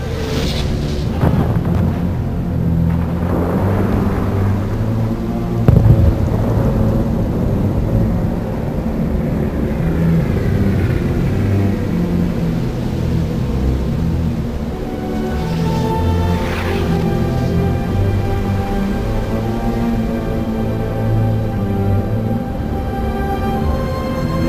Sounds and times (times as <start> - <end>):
Sound effect: 0.0 - 2.2, 15.1 - 17.6.